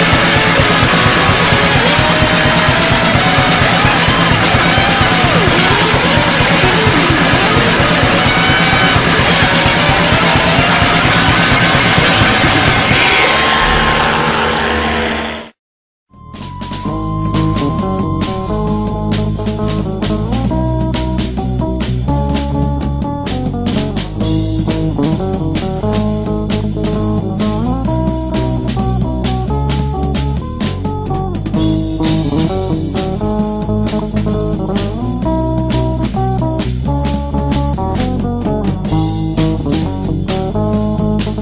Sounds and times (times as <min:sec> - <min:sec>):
Electric guitar: 0:00.0 - 0:15.5, 0:16.2 - 0:41.4
Bass guitar: 0:00.0 - 0:41.4.